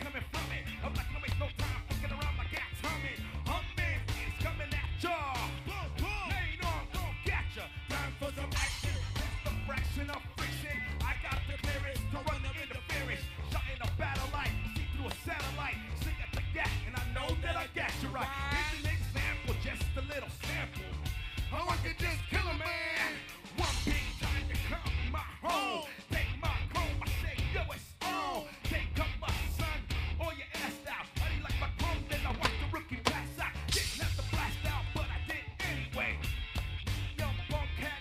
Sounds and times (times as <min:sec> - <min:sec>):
Music: 0:00.0 - 0:38.0.